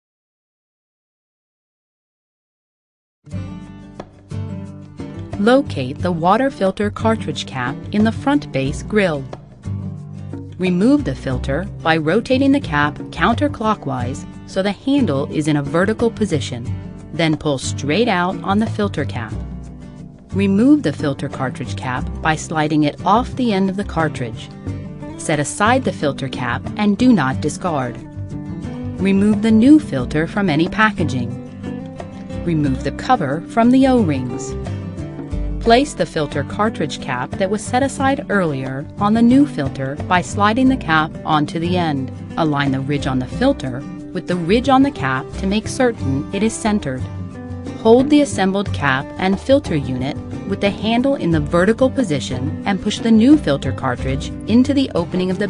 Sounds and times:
Music: 3.2s - 55.5s
Speech: 5.4s - 9.3s, 10.6s - 19.4s, 20.4s - 24.5s, 25.2s - 28.0s, 29.0s - 31.4s, 32.4s - 34.6s, 35.6s - 47.1s, 47.8s - 55.5s.

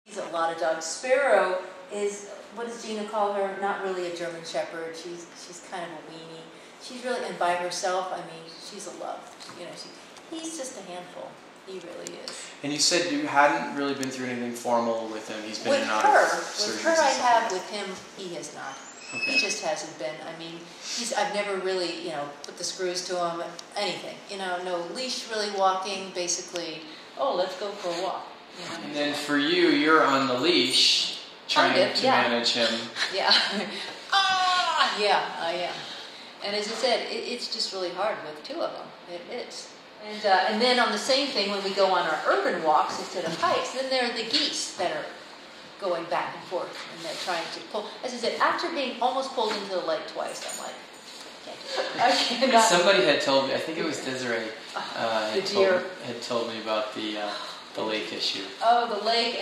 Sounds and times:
Speech: 0.1s - 33.5s, 34.2s - 45.2s, 51.5s - 59.4s.

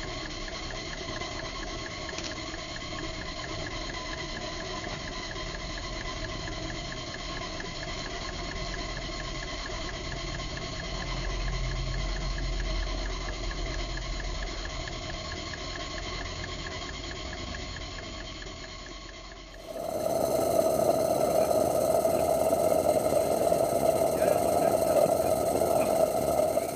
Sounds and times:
Engine: 0.0s - 26.7s.

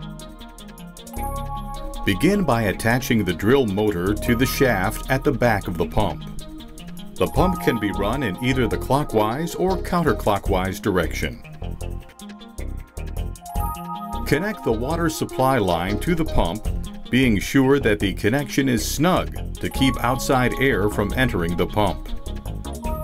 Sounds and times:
Music: 0.0s - 23.0s
Speech: 2.1s - 6.2s, 7.2s - 11.4s, 14.3s - 22.1s.

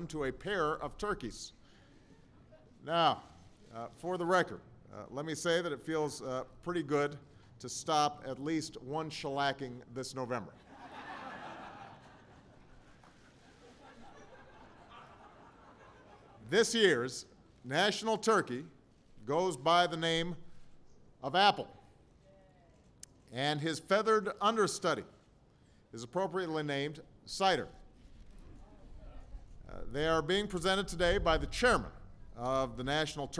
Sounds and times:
Speech: 0.0s - 1.6s, 2.5s - 10.6s, 16.4s - 20.4s, 21.2s - 21.8s, 23.3s - 25.2s, 26.0s - 27.8s, 29.0s - 33.4s.

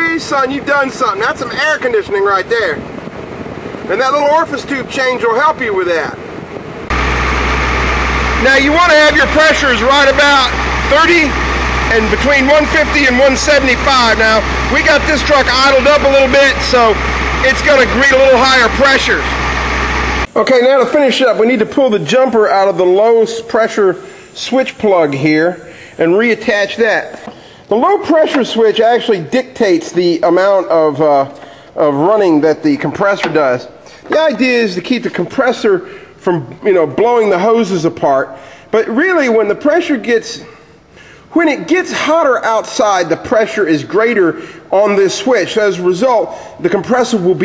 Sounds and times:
Speech: 0.0s - 2.8s, 3.9s - 6.2s, 8.4s - 19.3s, 20.3s - 40.5s, 41.3s - 47.4s.

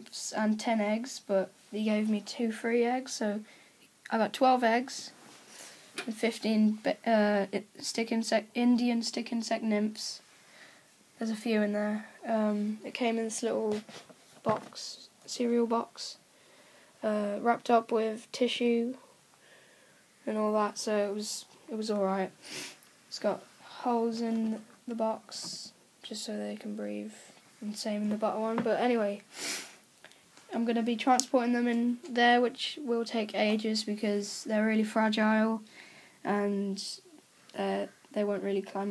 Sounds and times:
Speech: 0.0s - 3.5s, 4.1s - 5.2s, 6.0s - 10.2s, 11.2s - 16.2s, 17.0s - 19.0s, 20.2s - 22.4s, 23.1s - 29.2s, 30.5s - 38.9s.

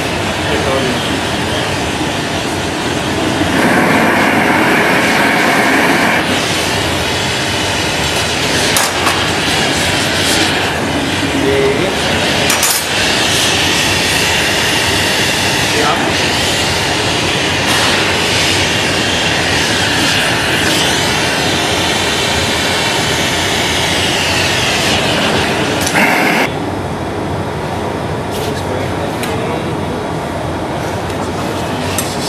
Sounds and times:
Inside, large room or hall: 0.0s - 32.2s
Speech: 0.4s - 1.1s, 11.4s - 12.1s, 15.7s - 16.3s, 28.3s - 30.1s.

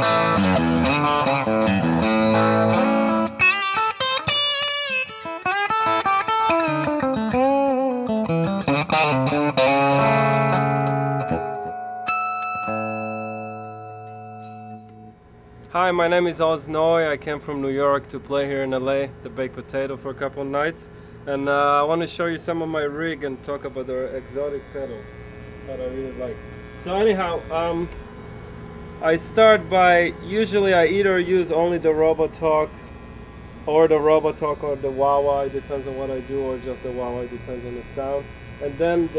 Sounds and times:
Guitar: 0.0s - 39.1s
Speech: 15.7s - 25.1s, 25.7s - 27.9s, 29.0s - 32.7s, 33.7s - 39.1s.

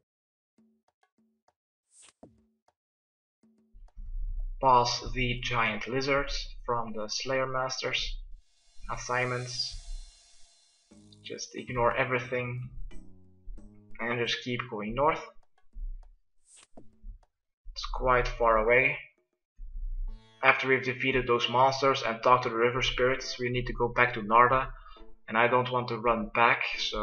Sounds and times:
Speech: 4.6s - 8.1s, 8.9s - 9.8s, 11.3s - 12.7s, 14.0s - 15.3s, 17.8s - 19.0s, 20.4s - 27.0s.

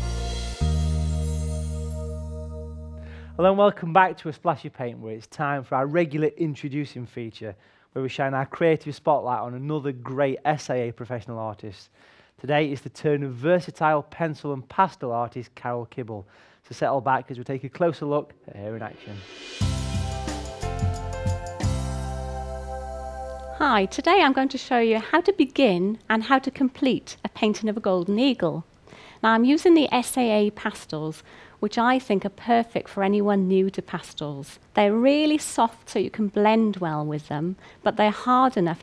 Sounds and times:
Speech: 3.4s - 19.3s, 23.6s - 38.8s.

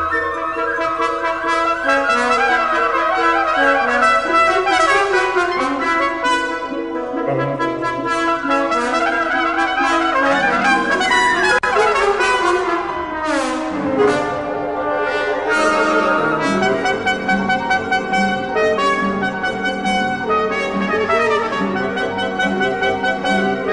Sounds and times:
Trombone: 0.0s - 23.7s
Trumpet: 0.0s - 23.7s.

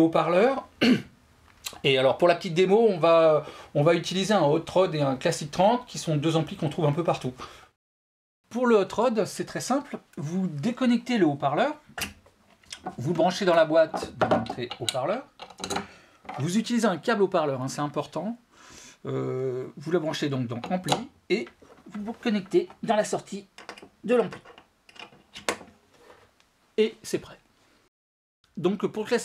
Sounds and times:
Speech: 0.0s - 0.7s, 1.7s - 7.4s, 8.5s - 11.8s, 12.9s - 15.3s, 16.3s - 18.4s, 19.0s - 24.4s, 26.8s - 27.4s, 28.6s - 29.2s.

